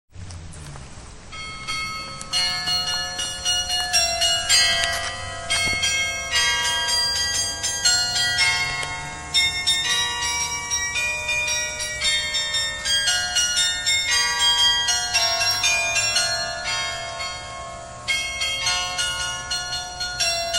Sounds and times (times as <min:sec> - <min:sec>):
Bell: 0:01.2 - 0:20.5.